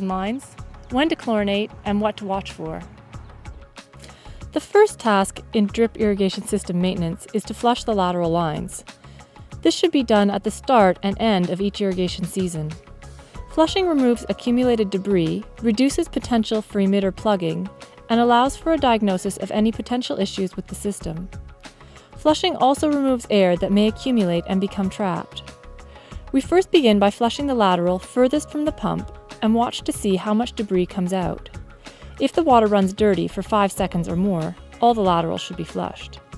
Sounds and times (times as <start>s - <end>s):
Speech: 0.0s - 2.9s, 4.6s - 8.8s, 9.6s - 12.8s, 13.5s - 21.3s, 22.2s - 25.4s, 26.3s - 31.5s, 32.2s - 36.2s.